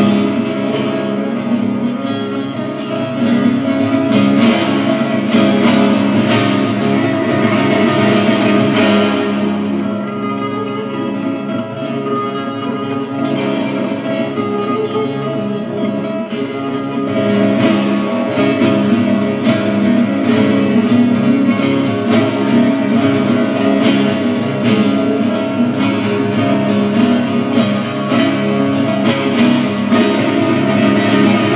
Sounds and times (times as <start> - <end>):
Acoustic guitar: 0.0 - 31.5.